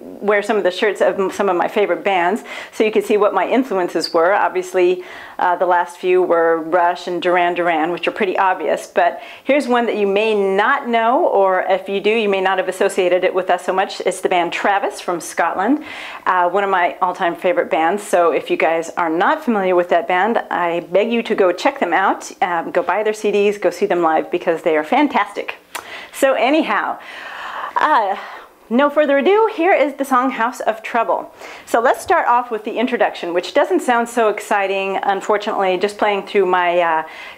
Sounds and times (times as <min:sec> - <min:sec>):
Speech: 0:00.0 - 0:27.0, 0:27.8 - 0:37.1.